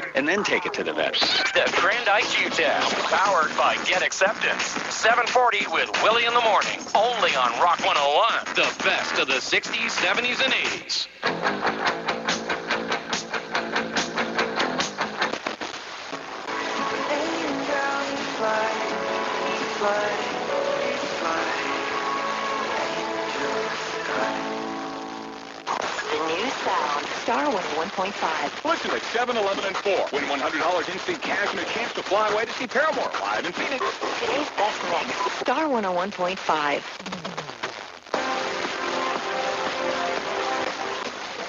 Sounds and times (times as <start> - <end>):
Speech: 0.0 - 11.2, 26.0 - 36.8
Radio: 0.0 - 11.3, 15.3 - 41.4
Music: 1.4 - 28.8, 37.6 - 41.4.